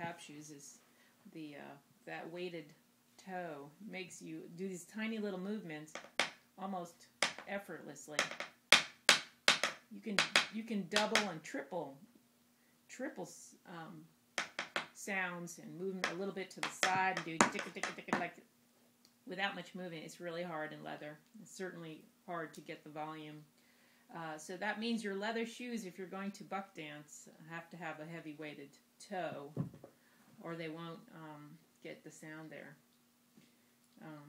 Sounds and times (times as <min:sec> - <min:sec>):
Speech: 0:00.0 - 0:06.0, 0:06.6 - 0:08.2, 0:09.9 - 0:12.0, 0:12.9 - 0:14.1, 0:15.0 - 0:18.5, 0:19.3 - 0:23.5, 0:24.1 - 0:29.6, 0:30.4 - 0:32.8, 0:34.0 - 0:34.2.